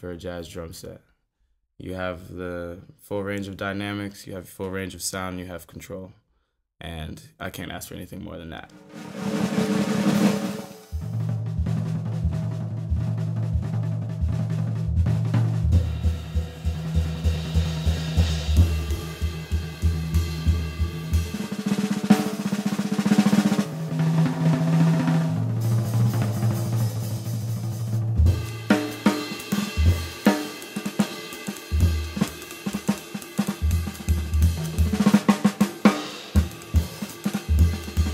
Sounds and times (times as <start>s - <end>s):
Speech: 0.0s - 1.1s, 1.8s - 6.2s, 6.8s - 8.7s
Drum kit: 8.6s - 38.1s
Drum roll: 8.6s - 38.1s
Bass drum: 10.9s - 21.6s, 23.5s - 30.9s, 31.7s - 38.1s.